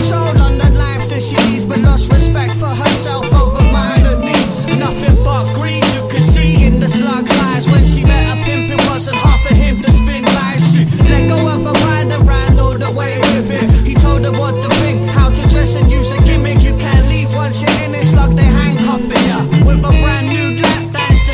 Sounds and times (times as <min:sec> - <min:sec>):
Music: 0:00.0 - 0:21.3.